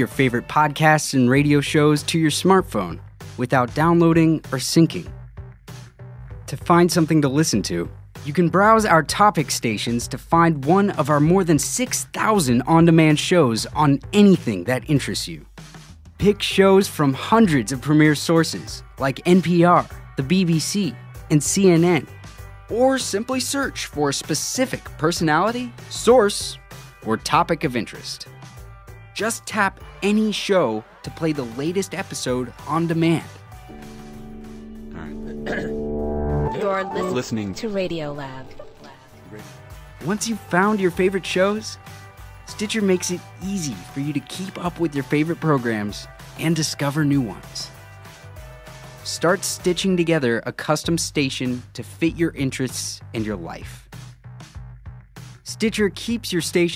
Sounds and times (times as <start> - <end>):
Speech: 0.0 - 5.2, 6.5 - 15.5, 16.2 - 22.1, 22.7 - 28.3, 29.2 - 33.4, 35.0 - 35.7, 36.6 - 41.8, 42.5 - 47.7, 49.1 - 53.9, 55.4 - 56.7
Music: 0.0 - 56.7.